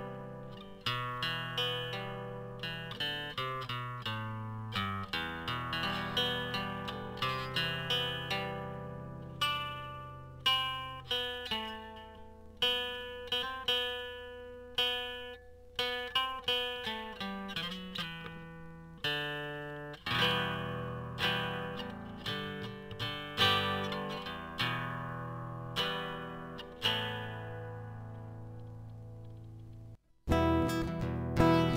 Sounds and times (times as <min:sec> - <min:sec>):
Acoustic guitar: 0:00.0 - 0:31.7.